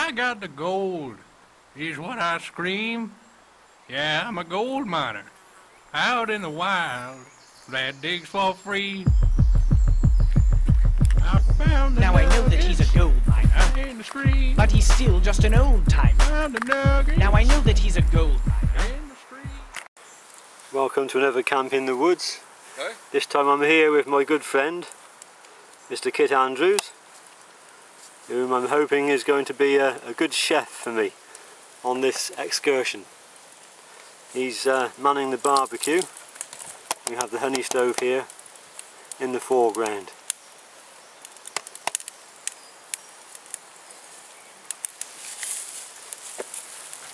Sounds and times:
Speech: 0:00.0 - 0:01.2, 0:01.8 - 0:03.2, 0:03.9 - 0:05.3, 0:06.0 - 0:09.1, 0:11.2 - 0:19.7, 0:20.7 - 0:25.0, 0:25.9 - 0:27.0, 0:28.3 - 0:31.2, 0:31.8 - 0:33.1, 0:34.4 - 0:36.1, 0:37.1 - 0:38.3, 0:39.2 - 0:40.2.

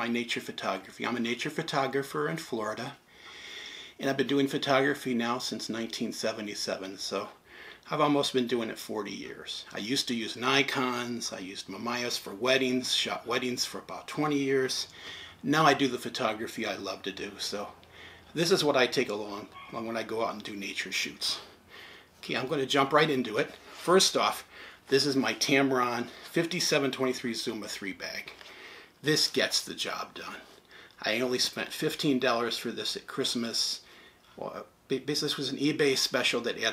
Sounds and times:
Speech: 0:00.0 - 0:03.0, 0:04.0 - 0:21.6, 0:22.2 - 0:28.4, 0:29.0 - 0:36.7.

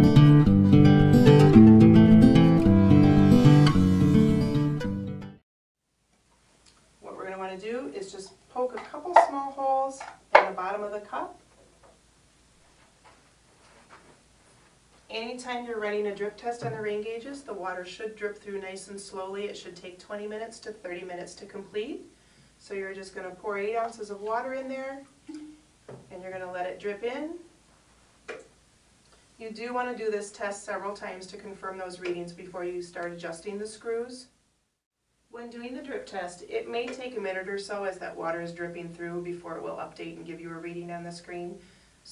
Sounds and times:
Speech: 0:07.0 - 0:11.4, 0:15.1 - 0:27.5, 0:29.4 - 0:34.3, 0:35.4 - 0:42.1.

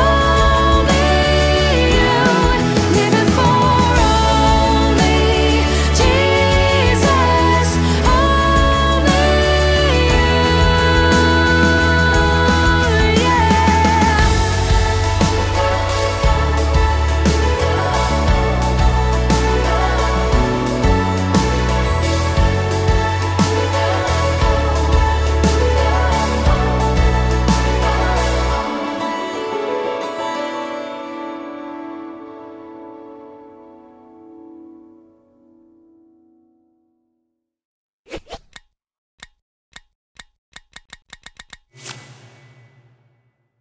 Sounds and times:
Music: 0:00.0 - 0:37.4.

